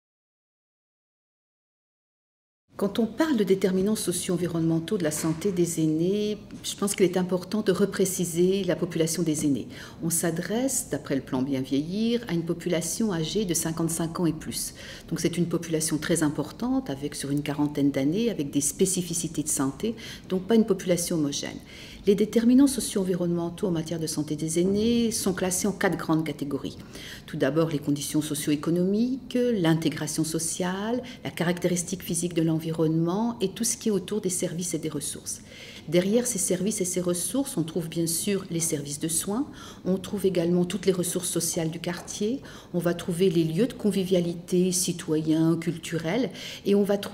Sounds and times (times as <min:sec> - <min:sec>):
Speech: 0:02.8 - 0:47.1.